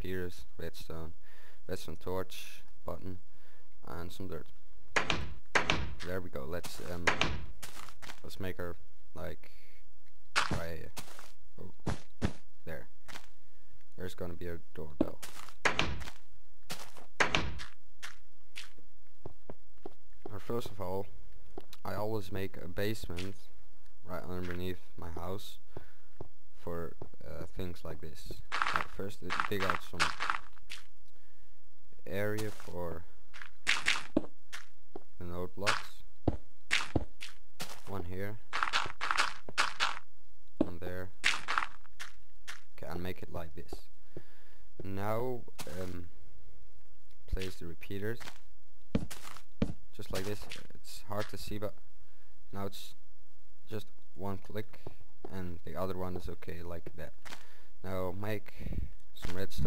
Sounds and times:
Speech: 0.0 - 3.2, 3.8 - 4.5, 6.0 - 7.2, 8.2 - 9.6, 10.5 - 11.0, 11.6 - 11.8, 12.6 - 12.9, 14.0 - 15.2, 20.3 - 21.1, 21.8 - 25.6, 26.6 - 30.2, 32.0 - 33.1, 35.2 - 36.0, 37.8 - 38.4, 40.6 - 41.1, 42.8 - 43.9, 44.8 - 46.1, 47.3 - 48.2, 49.9 - 51.8, 52.5 - 53.0, 53.7 - 57.2, 57.8 - 59.6.

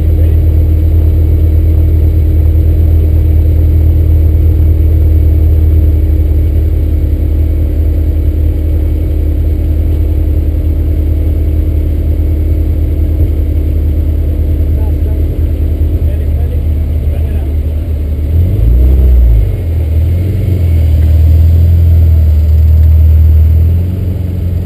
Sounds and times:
Car: 0.0 - 24.6.

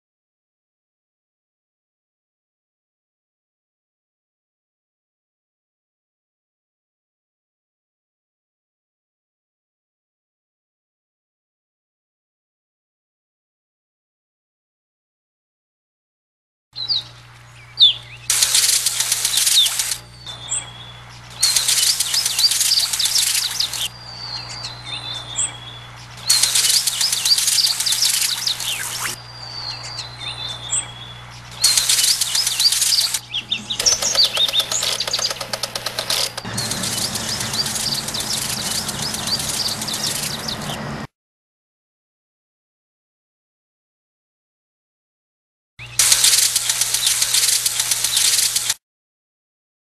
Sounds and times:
Chirp, tweet: 16.8 - 18.3, 19.0 - 40.9.

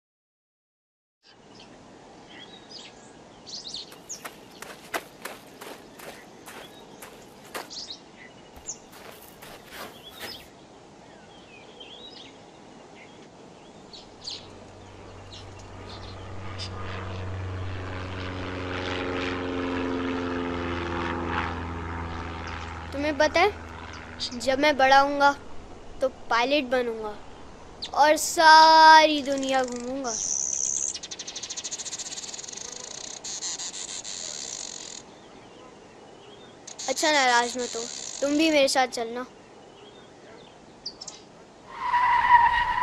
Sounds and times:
Chirp, tweet: 1.2 - 14.5, 29.6 - 32.8, 35.1 - 36.8, 39.3 - 41.3
Outside, rural or natural: 1.2 - 42.8.

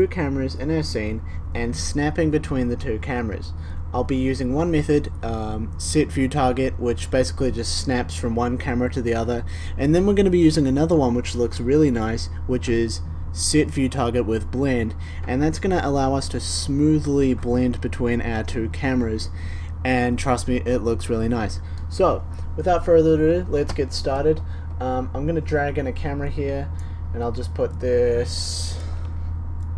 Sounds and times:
Speech: 0.0 - 28.9.

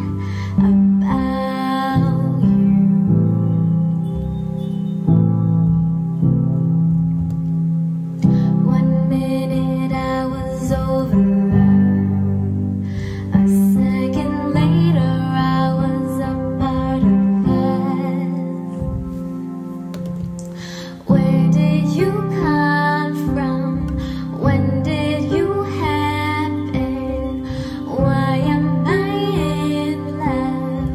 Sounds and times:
Music: 0.0 - 30.9.

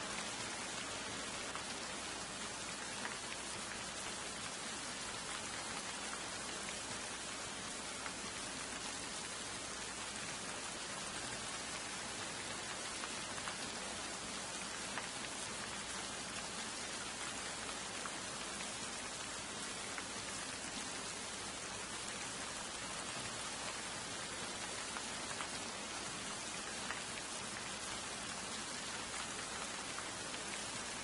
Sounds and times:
Rain on surface: 0.0 - 31.0.

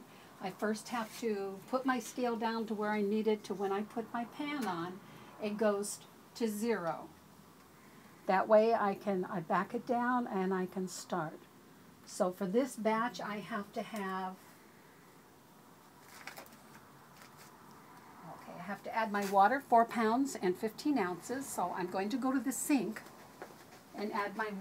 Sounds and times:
Speech: 0.4 - 7.1, 8.3 - 11.4, 12.1 - 14.4, 18.3 - 23.0, 24.0 - 24.6.

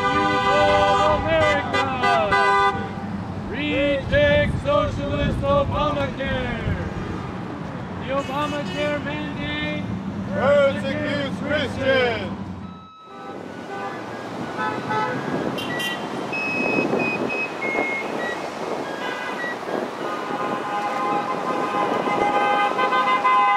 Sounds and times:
Speech: 3.6 - 6.9, 8.0 - 12.4.

